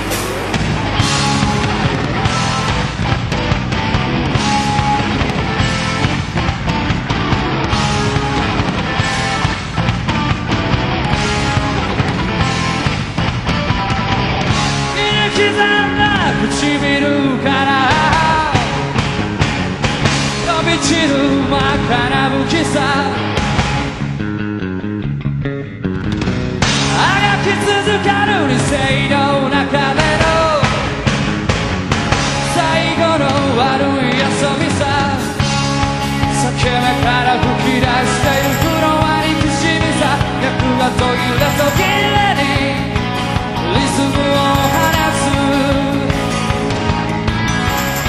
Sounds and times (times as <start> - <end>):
Music: 0.0 - 48.0.